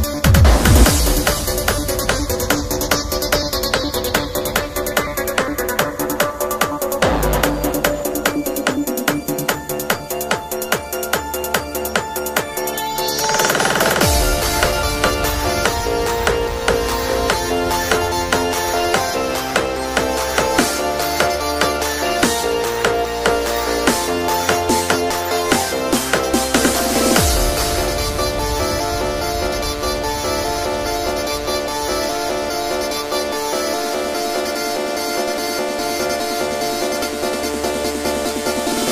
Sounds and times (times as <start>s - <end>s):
Music: 0.0s - 38.9s.